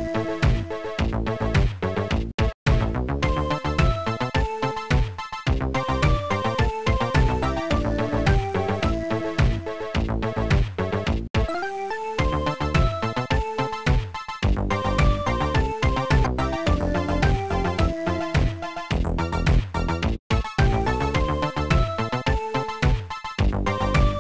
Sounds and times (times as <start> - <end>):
Music: 0.0 - 24.2.